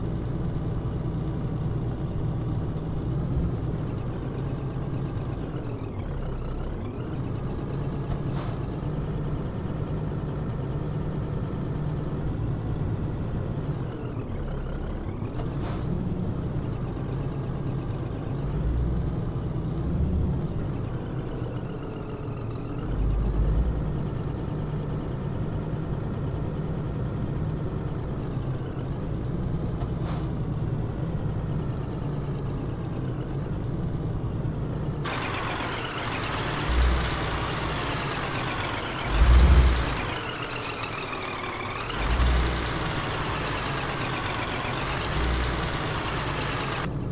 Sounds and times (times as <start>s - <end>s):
Truck: 0.0s - 47.1s.